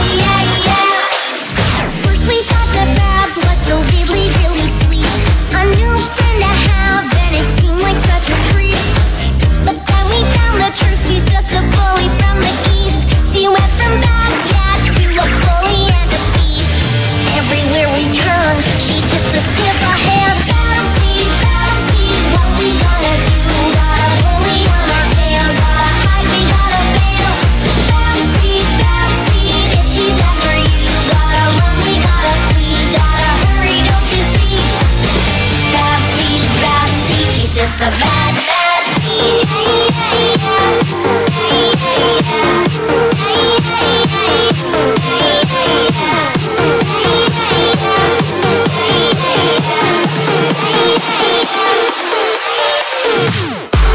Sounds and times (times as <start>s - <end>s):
Exciting music: 0.0s - 53.9s.